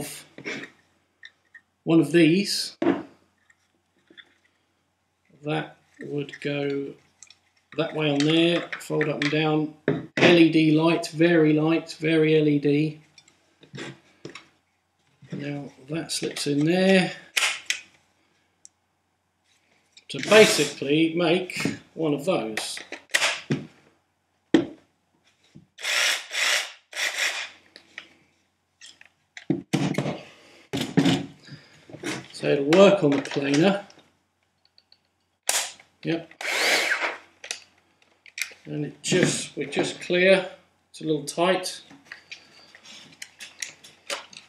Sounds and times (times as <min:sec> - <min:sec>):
Speech: 0:01.9 - 0:02.8, 0:05.4 - 0:07.0, 0:07.8 - 0:13.0, 0:15.3 - 0:17.2, 0:20.1 - 0:22.8, 0:32.4 - 0:33.9, 0:38.7 - 0:41.9
Power tool: 0:25.8 - 0:27.5, 0:36.4 - 0:37.2.